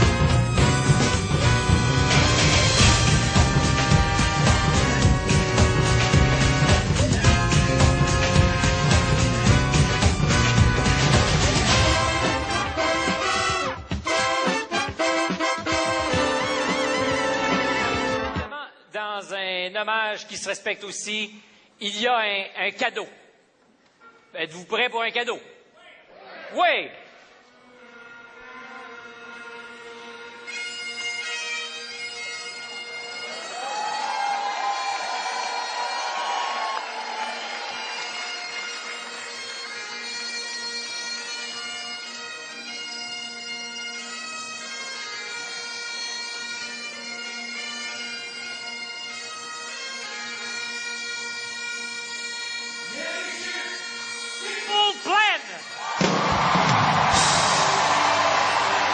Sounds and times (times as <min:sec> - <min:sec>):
Music: 0:00.0 - 0:18.6, 0:27.5 - 0:58.9
Speech: 0:18.5 - 0:23.3, 0:24.3 - 0:27.0, 0:54.5 - 0:55.6.